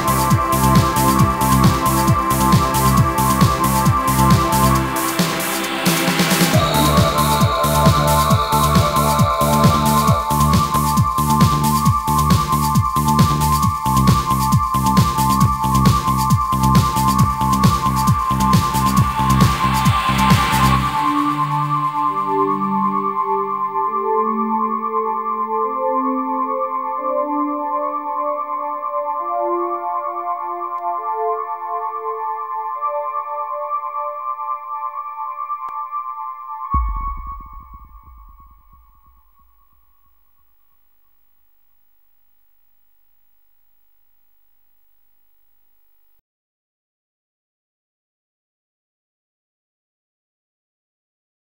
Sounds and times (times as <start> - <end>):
Trance music: 0.0 - 27.0, 36.8 - 39.8.